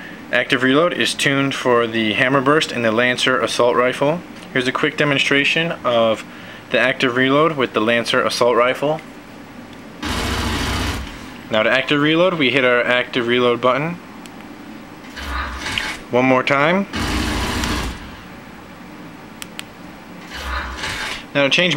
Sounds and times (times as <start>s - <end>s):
Speech: 0.3s - 9.1s, 11.5s - 14.0s, 16.1s - 17.0s, 21.3s - 21.7s.